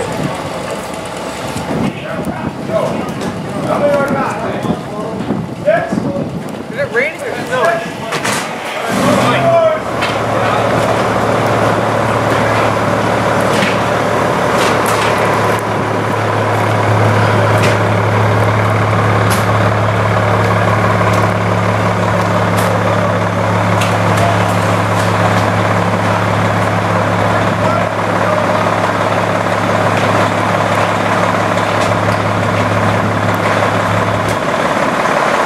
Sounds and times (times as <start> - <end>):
Truck: 0.0 - 35.4
Speech: 1.8 - 10.9, 22.4 - 25.2, 27.2 - 29.0.